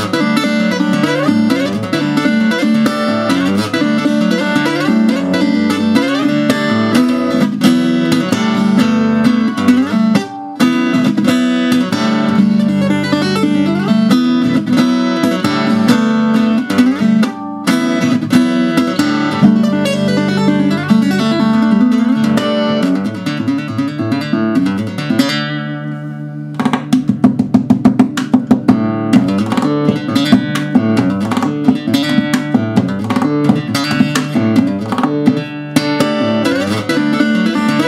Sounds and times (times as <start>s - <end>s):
Guitar: 0.0s - 37.8s.